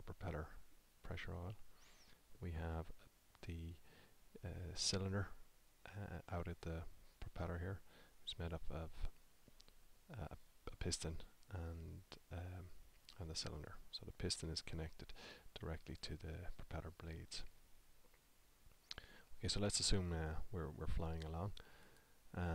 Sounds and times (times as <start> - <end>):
Speech: 0.0 - 1.6, 2.4 - 3.8, 4.4 - 9.2, 10.1 - 17.5, 19.4 - 21.6, 22.3 - 22.5.